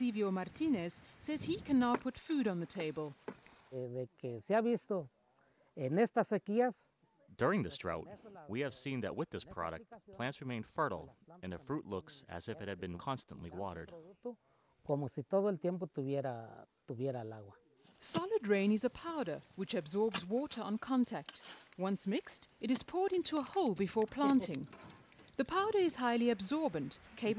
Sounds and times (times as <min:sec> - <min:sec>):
Speech: 0:00.0 - 0:03.1, 0:03.8 - 0:05.1, 0:05.8 - 0:24.7, 0:25.4 - 0:27.3.